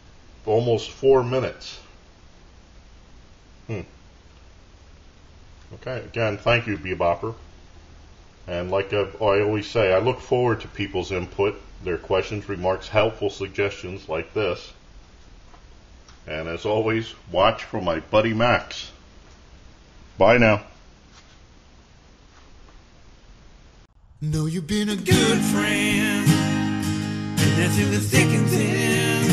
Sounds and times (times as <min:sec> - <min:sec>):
Inside, small room: 0:00.0 - 0:29.3
Speech: 0:00.4 - 0:02.0, 0:03.7 - 0:04.0, 0:05.7 - 0:07.4, 0:08.5 - 0:14.8, 0:16.3 - 0:19.0, 0:20.2 - 0:20.8.